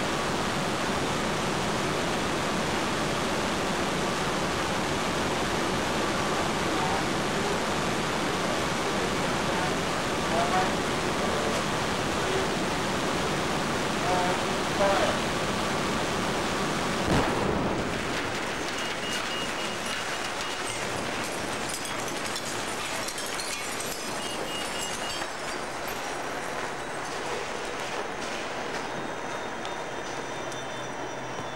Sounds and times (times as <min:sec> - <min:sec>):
Jet engine: 0:00.0 - 0:21.8
Speech: 0:08.8 - 0:12.6, 0:14.0 - 0:15.2.